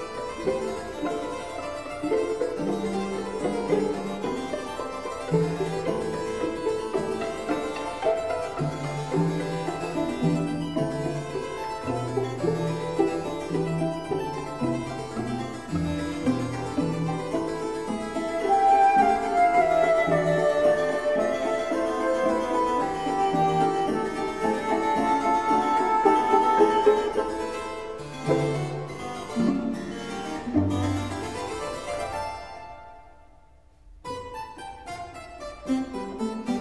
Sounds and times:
Harpsichord: 0:00.0 - 0:36.6.

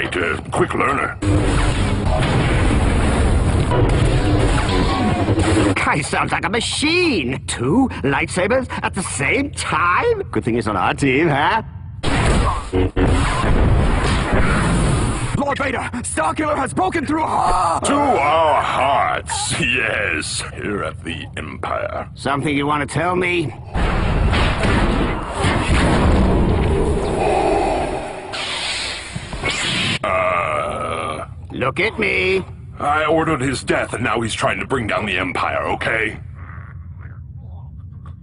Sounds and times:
Speech: 0:05.8 - 0:11.7, 0:15.4 - 0:23.6, 0:30.7 - 0:36.3.

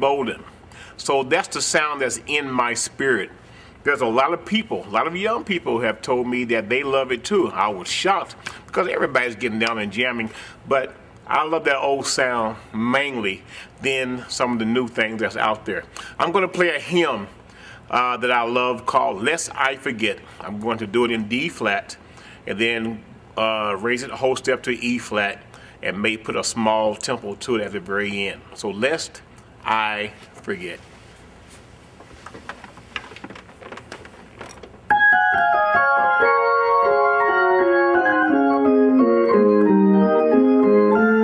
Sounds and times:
Speech: 0:00.0 - 0:30.9.

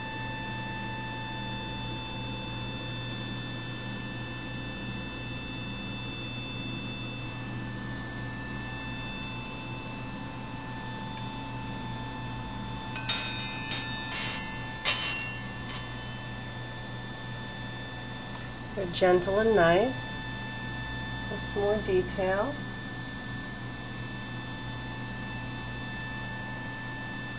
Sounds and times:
Wind chime: 0:13.0 - 0:16.8.

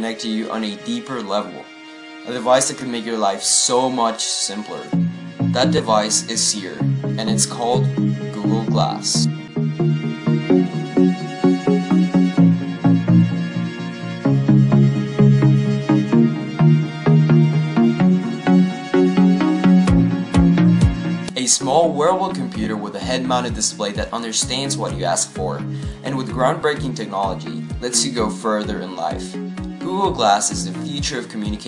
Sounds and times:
Speech: 0:00.0 - 0:01.7, 0:02.3 - 0:05.0, 0:05.6 - 0:09.3, 0:21.3 - 0:31.6
Music: 0:00.0 - 0:31.6.

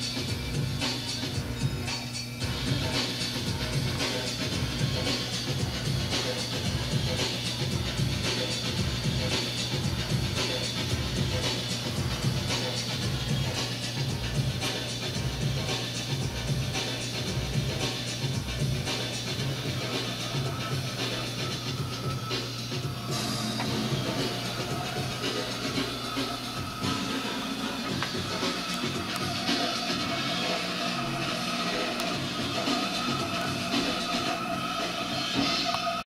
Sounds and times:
Music: 0:00.0 - 0:36.0.

